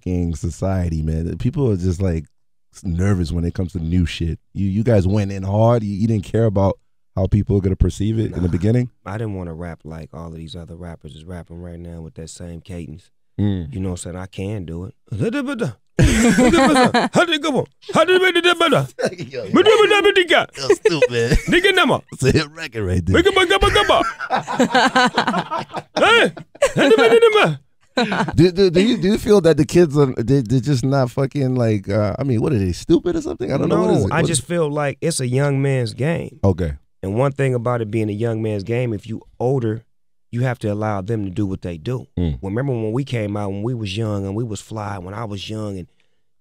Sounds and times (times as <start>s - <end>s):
Speech: 0.0s - 15.8s, 16.5s - 24.1s, 26.0s - 45.9s.